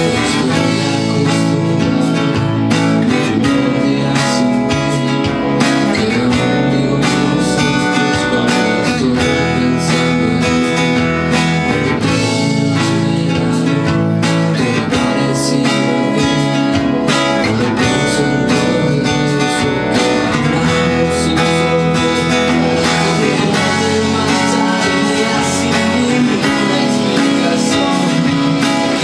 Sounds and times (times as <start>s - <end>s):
Acoustic guitar: 0.0s - 29.0s
Strum: 0.0s - 29.0s.